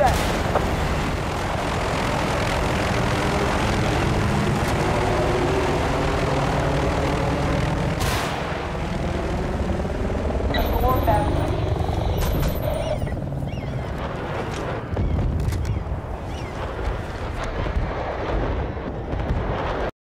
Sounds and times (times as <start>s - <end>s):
Helicopter: 0.0s - 19.9s
Speech: 10.6s - 11.6s.